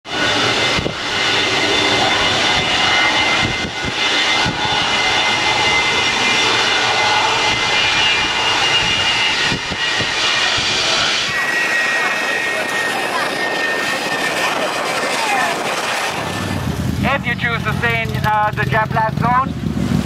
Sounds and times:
Aircraft engine: 0:00.0 - 0:20.0
Outside, urban or manmade: 0:00.0 - 0:20.0.

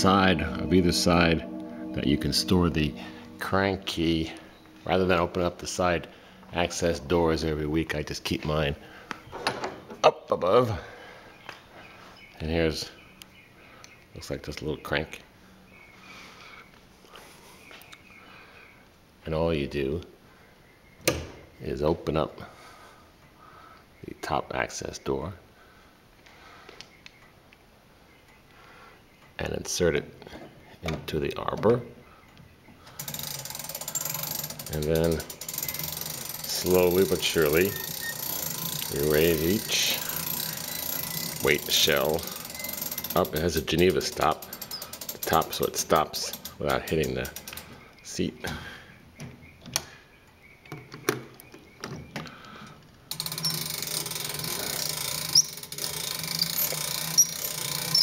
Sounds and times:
Speech: 0:10.0 - 0:10.8, 0:14.2 - 0:15.2, 0:19.2 - 0:20.1, 0:21.6 - 0:22.5, 0:24.0 - 0:25.4, 0:29.4 - 0:30.2, 0:30.8 - 0:31.9, 0:34.7 - 0:35.3, 0:36.5 - 0:37.8, 0:38.9 - 0:40.0, 0:41.4 - 0:42.3, 0:43.2 - 0:44.4, 0:45.2 - 0:47.4, 0:48.0 - 0:48.6.

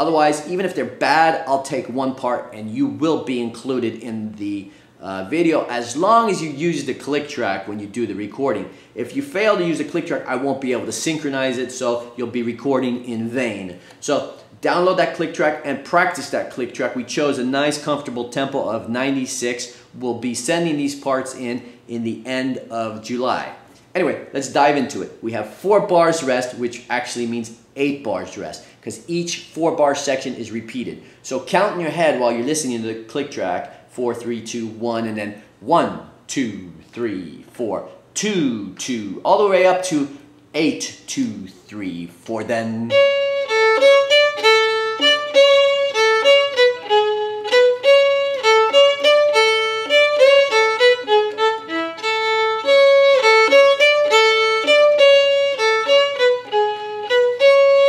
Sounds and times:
Speech: 0:00.0 - 0:43.0.

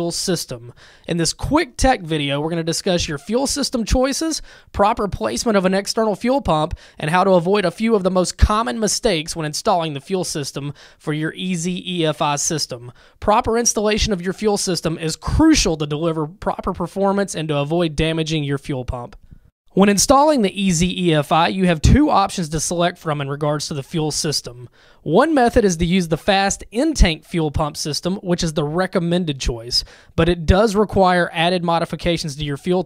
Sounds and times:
Speech: 0:00.0 - 0:32.8.

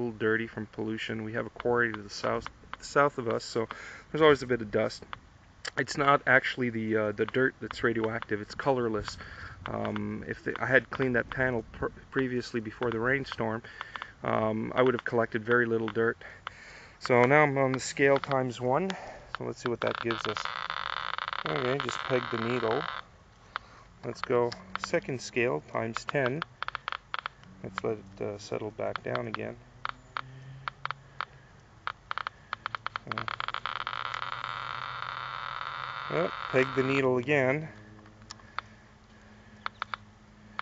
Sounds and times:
Speech: 0:00.0 - 0:05.1, 0:05.7 - 0:16.3, 0:17.0 - 0:20.5, 0:21.5 - 0:22.9, 0:24.0 - 0:26.4, 0:27.6 - 0:29.6, 0:36.1 - 0:37.8.

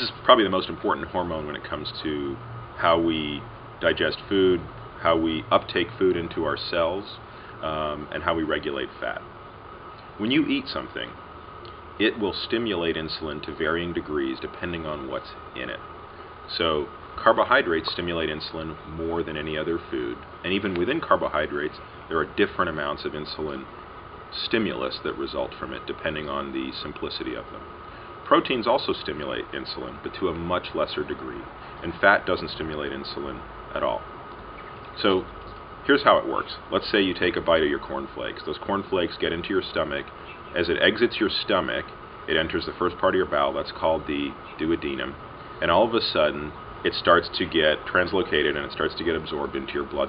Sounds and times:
Speech: 0:00.0 - 0:09.3, 0:10.2 - 0:11.2, 0:12.0 - 0:15.8, 0:16.5 - 0:23.7, 0:24.3 - 0:27.7, 0:28.3 - 0:34.1, 0:35.0 - 0:50.0.

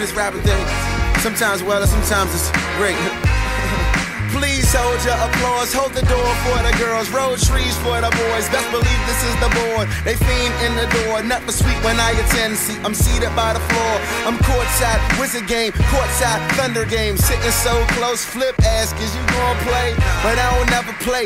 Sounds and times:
Music: 0:00.0 - 0:21.2.

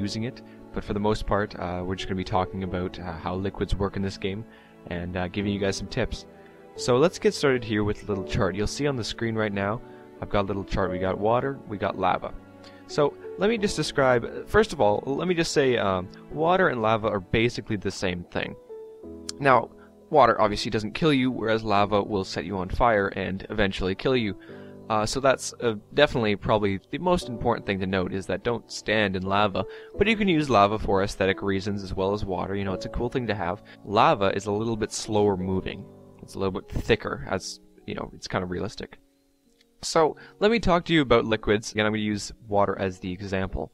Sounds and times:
Speech: 0:00.0 - 0:18.6, 0:19.3 - 0:39.0, 0:39.8 - 0:43.7
Music: 0:00.0 - 0:43.7.

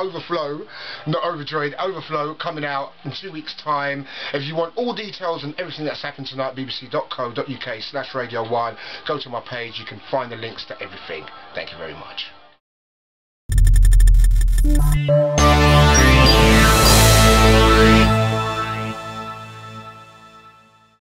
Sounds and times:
Speech: 0:00.0 - 0:12.4
Music: 0:08.2 - 0:12.6, 0:14.6 - 0:21.0.

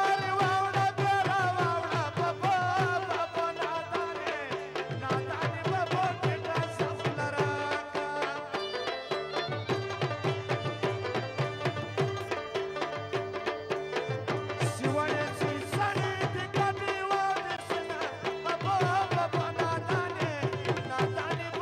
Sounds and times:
Folk music: 0:00.0 - 0:21.6.

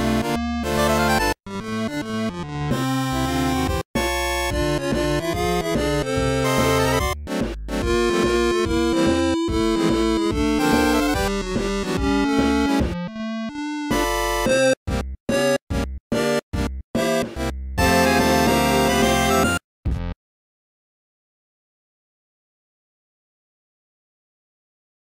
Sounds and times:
Soundtrack music: 0:03.2 - 0:20.2
Theme music: 0:04.0 - 0:14.7, 0:17.0 - 0:19.6.

